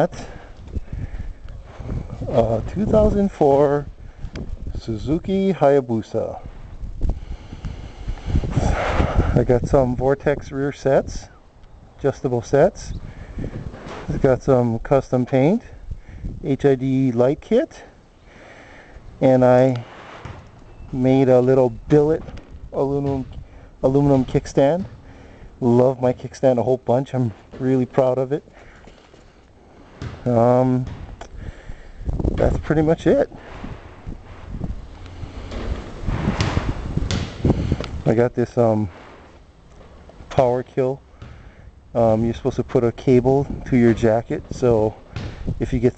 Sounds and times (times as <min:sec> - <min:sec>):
Speech: 0:00.0 - 0:00.3, 0:02.3 - 0:03.9, 0:04.8 - 0:06.5, 0:09.4 - 0:11.4, 0:12.0 - 0:13.0, 0:14.1 - 0:15.8, 0:16.4 - 0:17.9, 0:19.2 - 0:19.8, 0:20.9 - 0:24.9, 0:25.6 - 0:28.4, 0:30.2 - 0:30.9, 0:32.4 - 0:33.4, 0:38.0 - 0:38.9, 0:40.3 - 0:41.0, 0:42.0 - 0:45.0, 0:45.6 - 0:45.9.